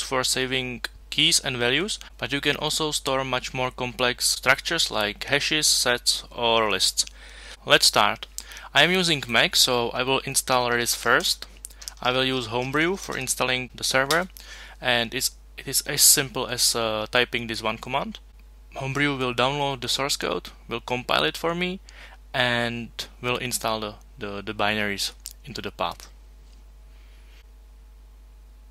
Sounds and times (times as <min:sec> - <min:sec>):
Speech: 0:00.0 - 0:21.8, 0:22.4 - 0:26.2.